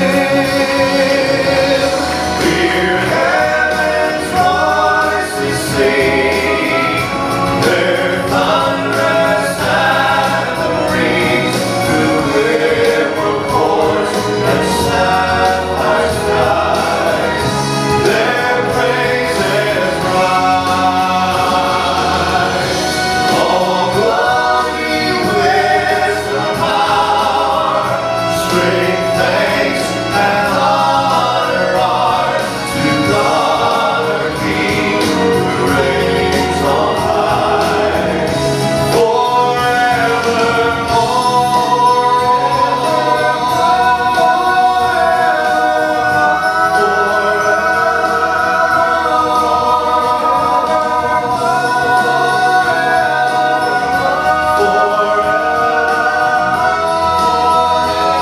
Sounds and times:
Choir: 0.0s - 58.2s
Vocal music: 0.0s - 58.2s.

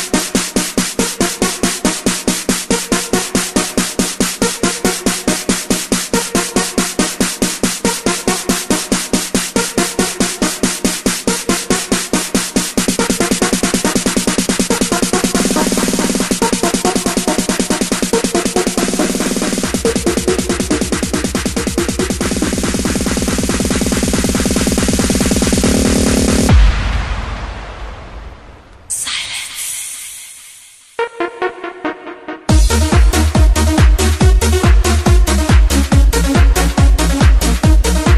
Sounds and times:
Electronic dance music: 0.0s - 26.7s, 28.9s - 38.1s.

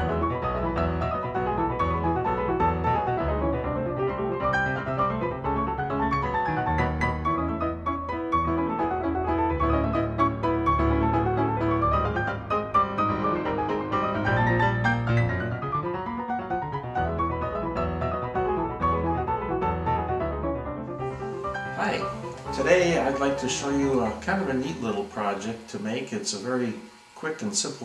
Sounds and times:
Music: 0.0s - 27.1s
Speech: 21.8s - 27.8s.

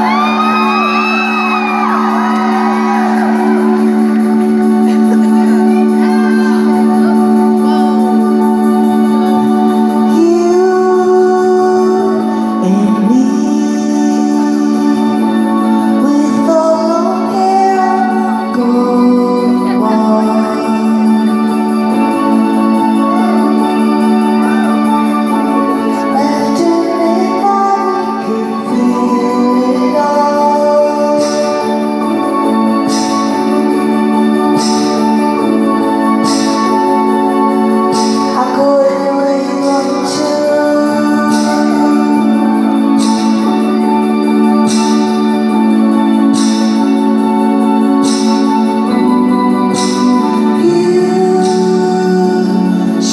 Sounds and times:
Independent music: 0.0s - 53.1s.

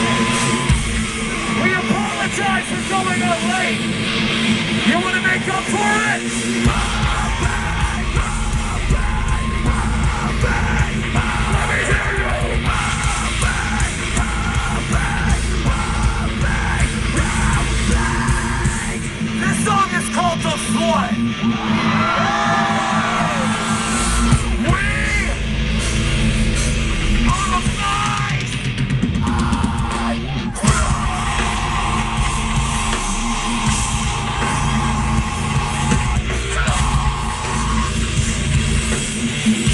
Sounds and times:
Music: 0.0s - 39.7s.

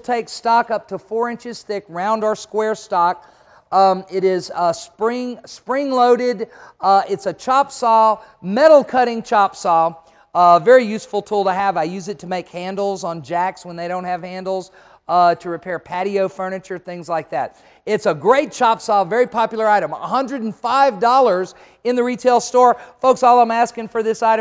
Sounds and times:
Speech: 0.0s - 24.4s.

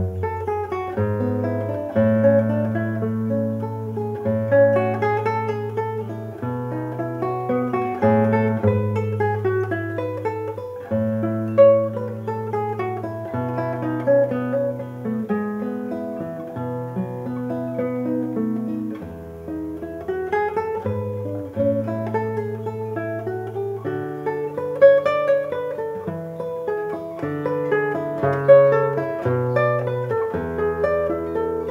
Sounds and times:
Guitar: 0.0s - 31.7s.

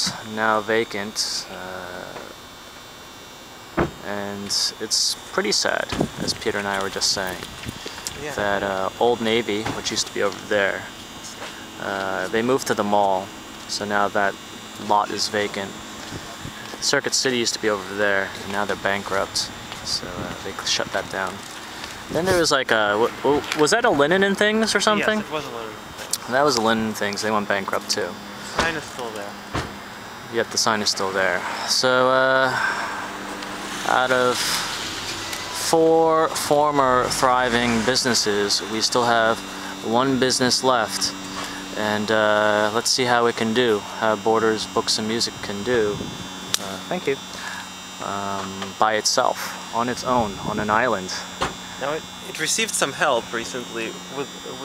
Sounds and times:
Speech: 0.0s - 2.3s, 4.0s - 7.5s, 8.1s - 15.8s, 16.7s - 21.4s, 22.1s - 29.4s, 30.3s - 32.7s, 33.8s - 34.6s, 35.6s - 46.0s, 46.6s - 47.2s, 48.0s - 54.6s
Car: 0.0s - 54.6s
Outside, urban or manmade: 0.0s - 54.6s.

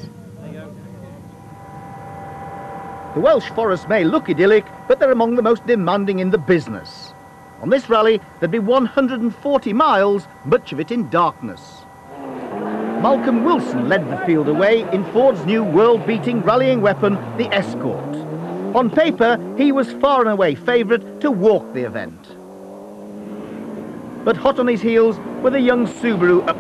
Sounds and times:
Speech: 3.2s - 11.8s, 13.0s - 18.2s, 18.8s - 22.4s, 24.3s - 26.6s
Accelerating, revving, vroom: 12.1s - 26.6s.

